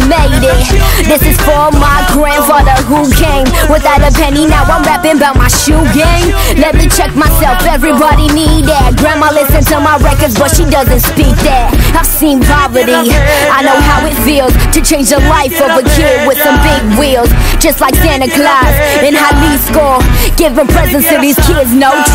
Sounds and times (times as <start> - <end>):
Music: 0.0 - 22.1.